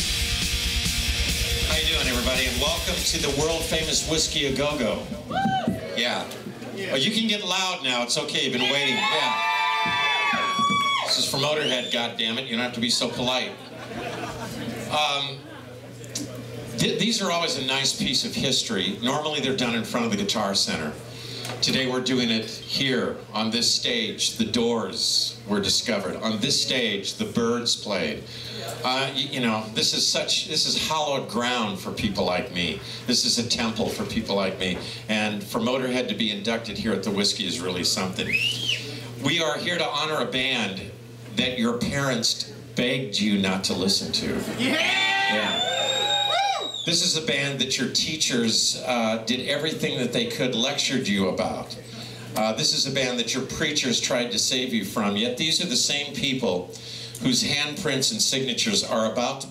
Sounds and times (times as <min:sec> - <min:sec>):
Speech: 0:01.6 - 0:05.2, 0:05.8 - 0:09.4, 0:11.1 - 0:13.7, 0:14.9 - 0:21.0, 0:21.6 - 0:38.3, 0:39.2 - 0:45.6, 0:46.9 - 0:59.5.